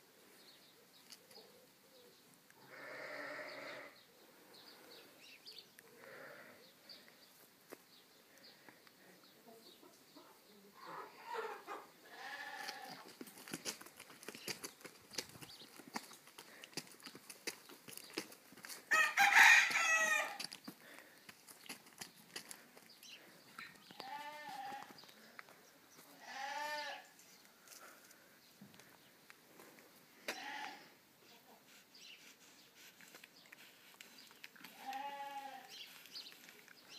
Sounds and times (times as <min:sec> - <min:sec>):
Goat: 0:09.8 - 0:28.1, 0:30.2 - 0:36.9.